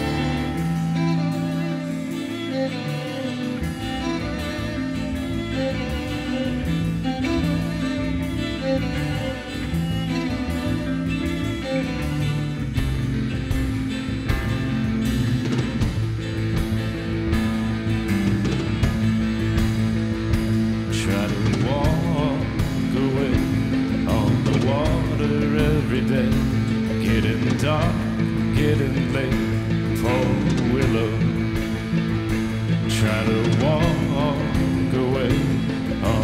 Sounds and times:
Music: 0:00.0 - 0:36.2.

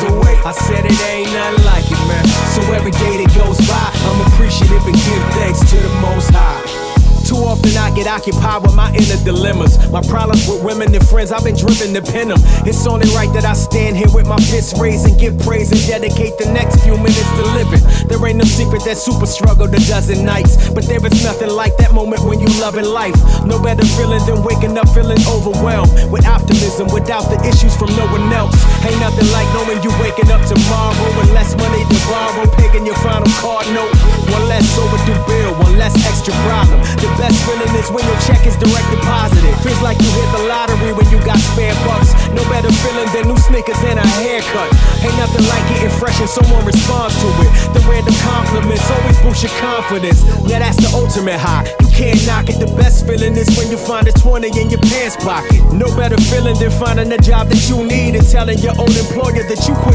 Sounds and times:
Music: 0:00.0 - 0:59.9.

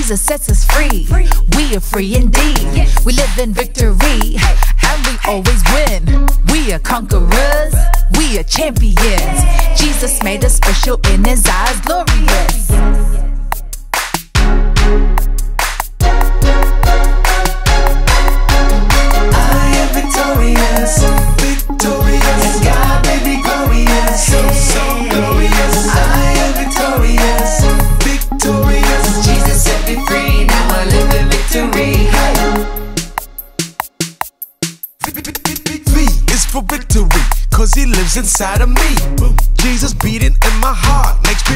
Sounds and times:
Music: 0:00.0 - 0:41.5.

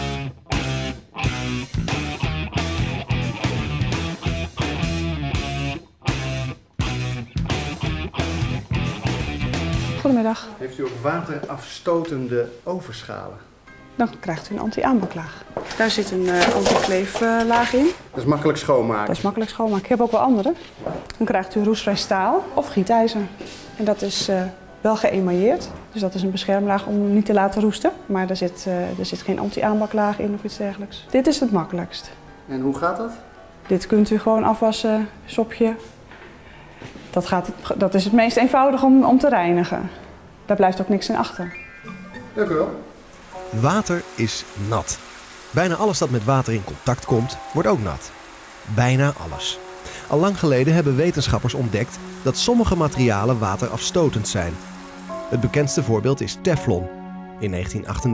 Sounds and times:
Music: 0:00.0 - 0:58.1.

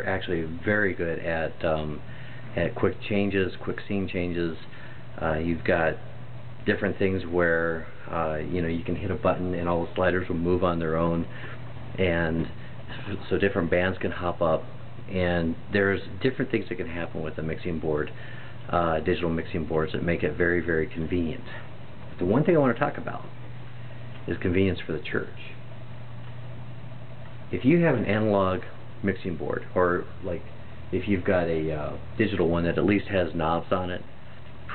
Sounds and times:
Speech: 0:00.0 - 0:11.4, 0:12.0 - 0:23.4, 0:24.2 - 0:25.6, 0:27.5 - 0:34.1.

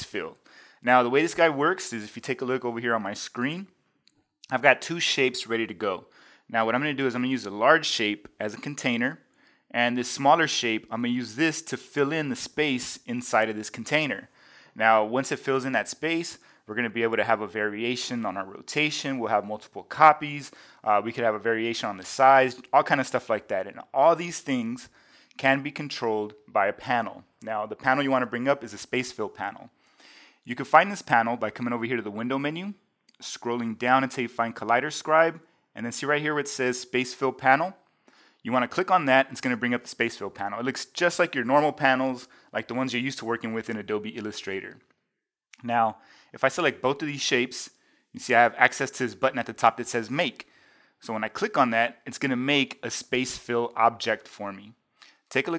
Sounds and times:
Speech: 0:00.0 - 0:03.8, 0:04.4 - 0:29.8, 0:30.5 - 0:37.8, 0:38.4 - 0:44.9, 0:45.6 - 0:55.5.

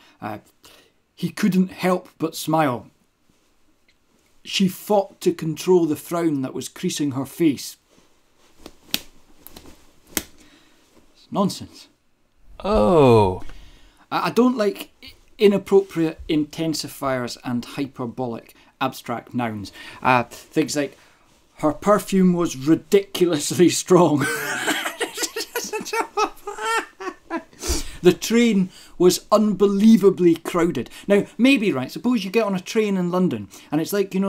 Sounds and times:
Speech: 0:00.2 - 0:00.5, 0:01.2 - 0:02.9, 0:04.5 - 0:07.8, 0:11.2 - 0:12.0, 0:12.6 - 0:13.5, 0:14.1 - 0:21.0, 0:21.6 - 0:24.5, 0:28.0 - 0:34.2.

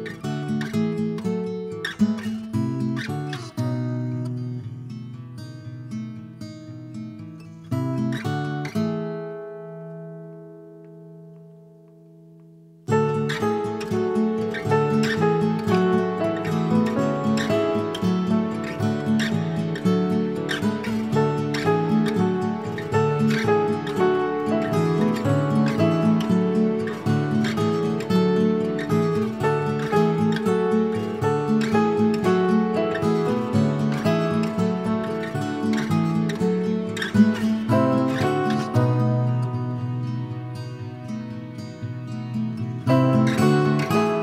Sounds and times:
Acoustic guitar: 0:00.0 - 0:44.2.

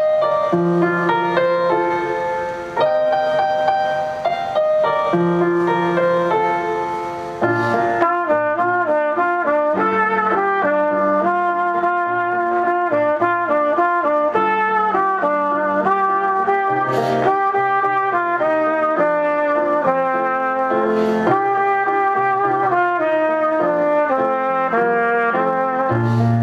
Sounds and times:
Trumpet: 0:00.0 - 0:26.4.

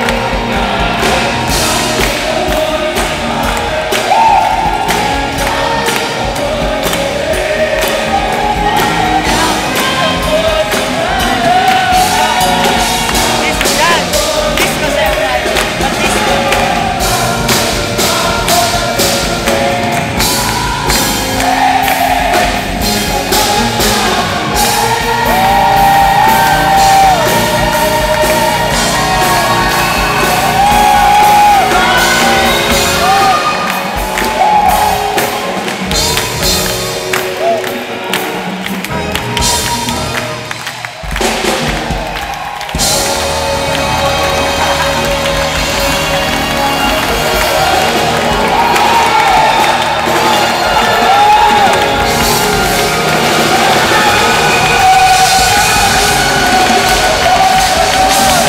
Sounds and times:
Music: 0:00.0 - 0:58.4
Speech: 0:13.3 - 0:16.4.

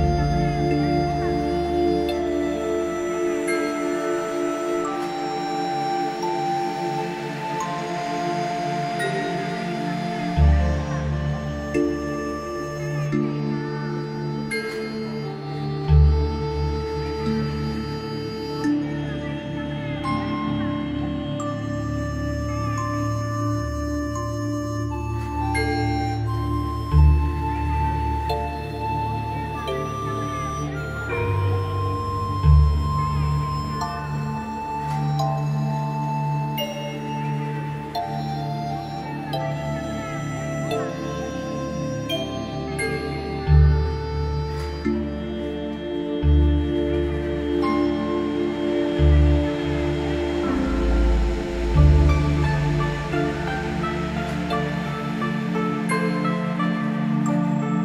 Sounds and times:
Ambient music: 0:00.0 - 0:57.8.

